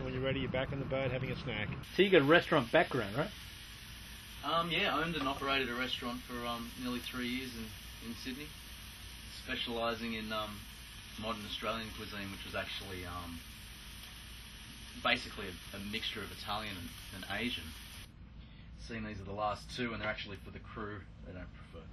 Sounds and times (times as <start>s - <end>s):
Speech: 0.0s - 3.3s, 4.4s - 8.5s, 9.3s - 10.6s, 11.2s - 13.4s, 15.0s - 17.8s, 18.8s - 21.9s.